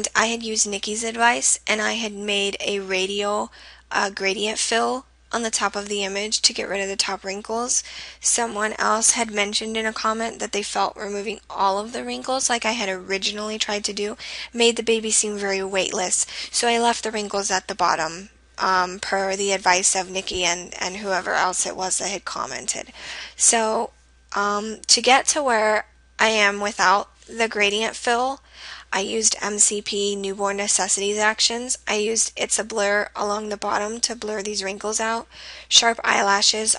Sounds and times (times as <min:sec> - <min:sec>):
Speech: 0:00.0 - 0:36.7.